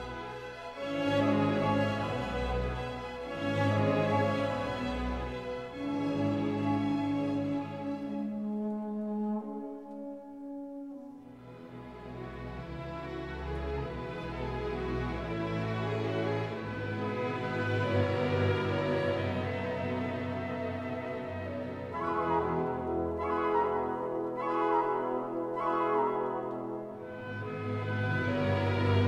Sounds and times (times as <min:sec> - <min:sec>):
French horn: 0:00.0 - 0:29.0.